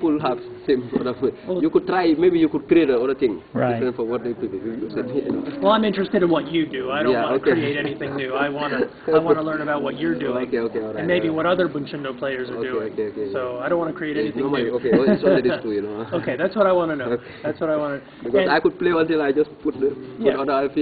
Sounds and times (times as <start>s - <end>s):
Laughter: 7.4s - 9.5s, 14.7s - 16.5s.